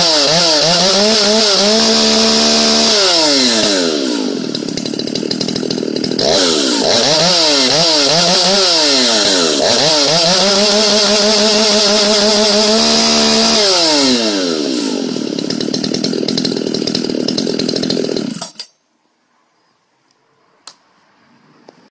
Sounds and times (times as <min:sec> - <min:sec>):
Chainsaw: 0:00.0 - 0:18.7.